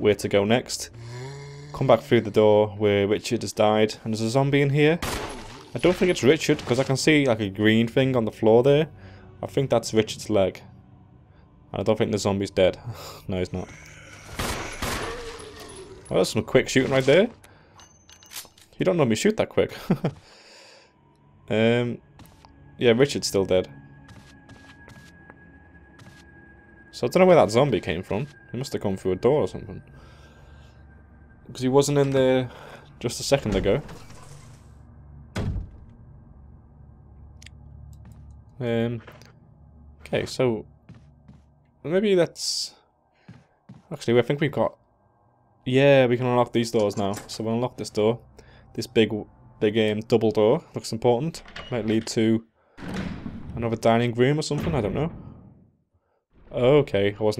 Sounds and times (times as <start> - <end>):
Speech: 0.0 - 1.0, 1.7 - 5.0, 5.8 - 10.6, 11.7 - 13.8, 16.1 - 17.4, 18.8 - 19.8, 21.5 - 22.0, 22.8 - 23.7, 27.0 - 29.8, 31.5 - 33.9, 38.6 - 39.1, 40.0 - 40.7, 41.9 - 42.8, 43.9 - 44.8, 45.7 - 48.2, 48.8 - 52.5, 53.6 - 55.2, 56.5 - 57.3.